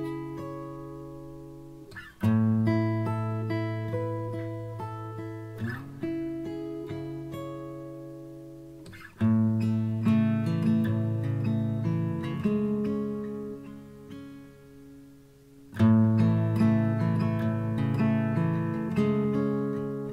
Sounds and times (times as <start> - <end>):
Acoustic guitar: 0.0 - 20.1.